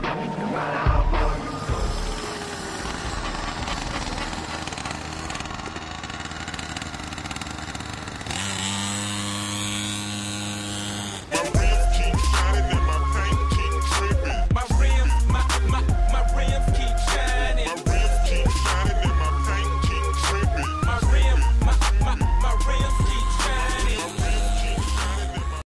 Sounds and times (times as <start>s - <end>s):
Music: 0.0s - 4.5s, 11.3s - 25.6s.